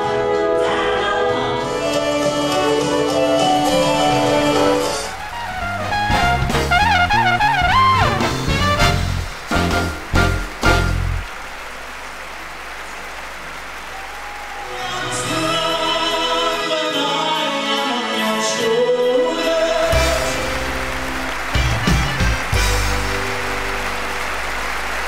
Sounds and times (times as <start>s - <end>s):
Music: 0.0s - 11.3s, 14.8s - 25.0s.